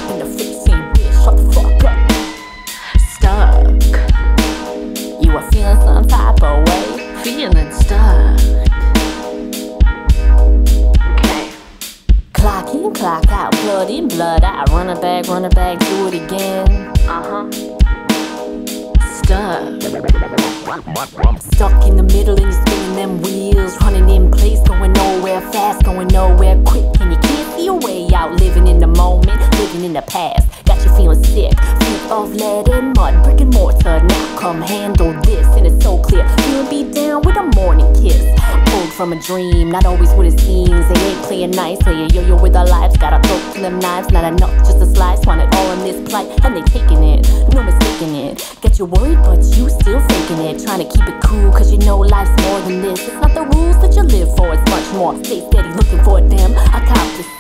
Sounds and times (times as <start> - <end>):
Music: 0.0 - 57.4.